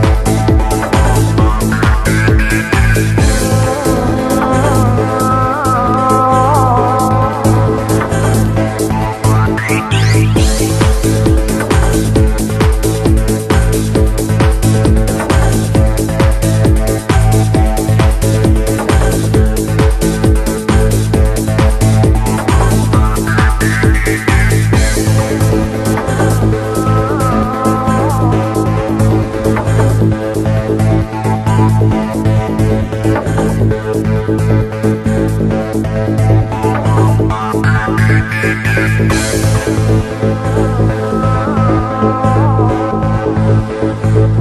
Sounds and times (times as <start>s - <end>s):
Music: 0.0s - 44.4s.